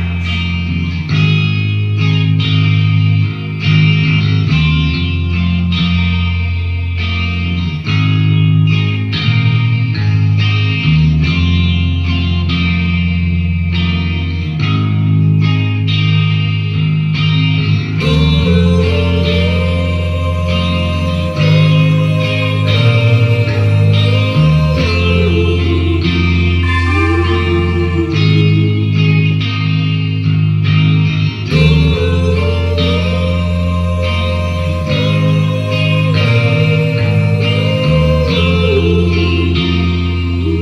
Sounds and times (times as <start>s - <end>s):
Music: 0.0s - 40.6s.